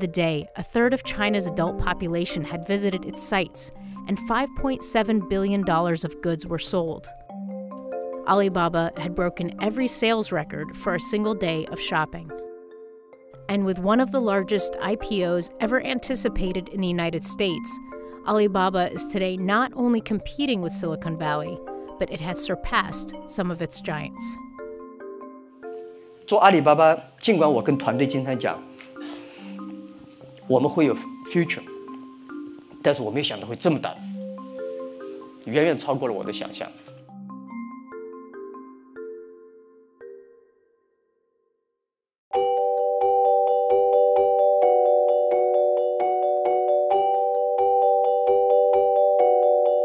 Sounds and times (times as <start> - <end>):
Marimba, xylophone: 0.0 - 26.3, 27.3 - 40.8, 42.3 - 49.8
Glockenspiel: 27.6 - 41.3, 42.3 - 49.8.